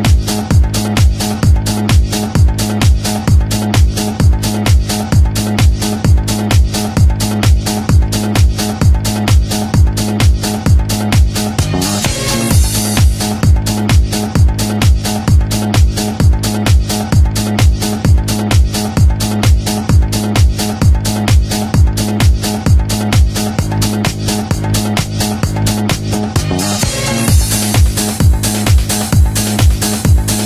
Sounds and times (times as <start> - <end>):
House music: 0.0 - 30.4.